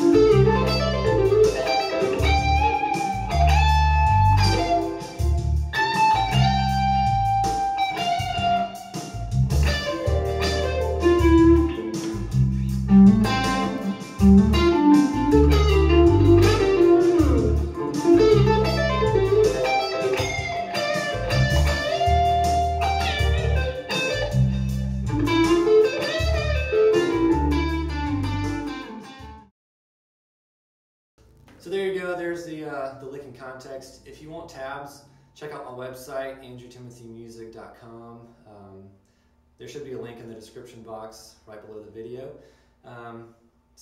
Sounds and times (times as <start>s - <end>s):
Bass guitar: 0.0s - 29.5s.